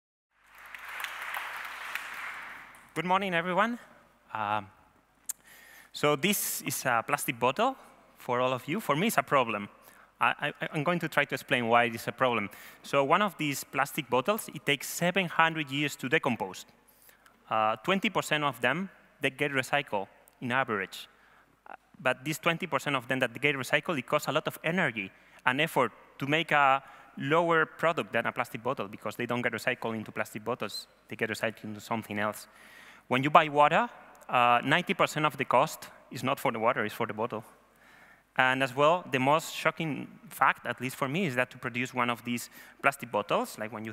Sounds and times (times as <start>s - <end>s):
Speech: 3.0s - 4.8s, 6.0s - 16.7s, 17.5s - 21.1s, 21.7s - 32.5s, 33.1s - 37.5s, 38.4s - 43.9s.